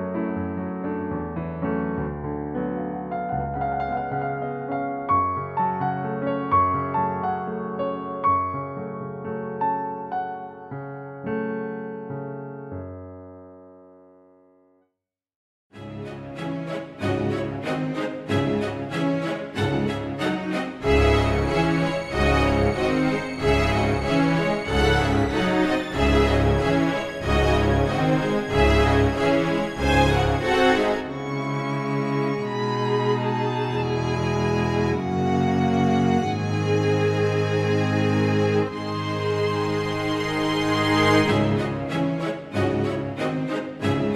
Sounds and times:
Music: 0.0s - 15.0s, 15.7s - 44.1s.

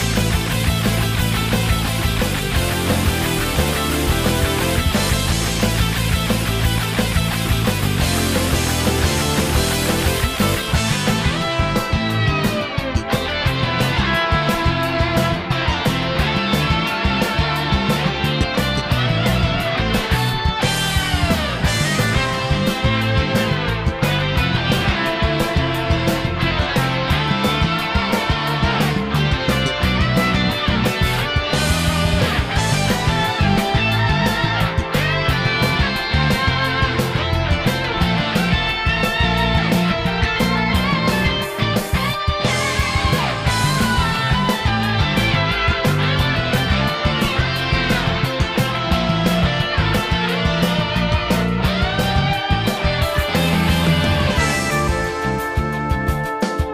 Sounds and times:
Funk: 0.0s - 56.7s
Pop music: 0.0s - 56.7s.

